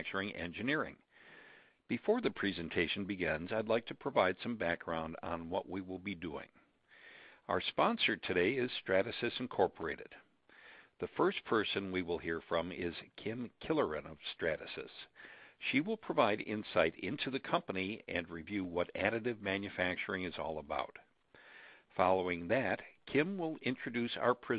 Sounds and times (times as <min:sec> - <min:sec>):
Speech: 0:00.0 - 0:01.1, 0:01.9 - 0:06.6, 0:07.5 - 0:10.3, 0:11.0 - 0:21.1, 0:21.9 - 0:24.5.